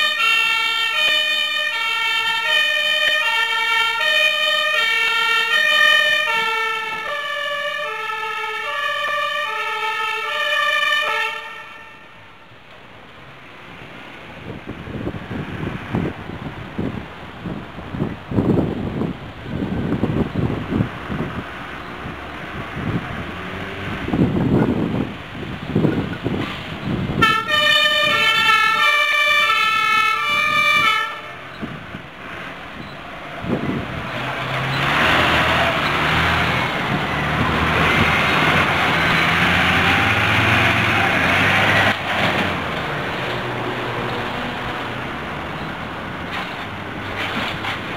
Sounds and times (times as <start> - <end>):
Vehicle: 0.0 - 47.9
Engine: 31.5 - 47.9.